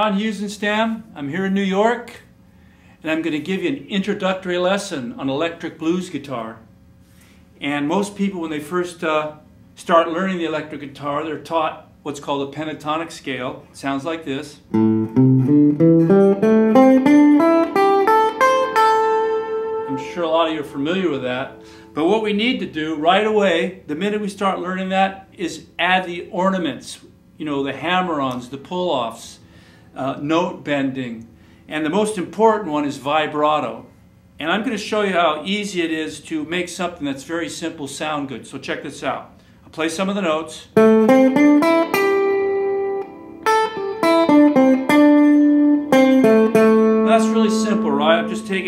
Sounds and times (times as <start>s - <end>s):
Speech: 0.0s - 2.3s, 3.0s - 6.7s, 7.6s - 14.7s, 19.9s - 29.4s, 30.0s - 40.8s, 47.0s - 48.6s.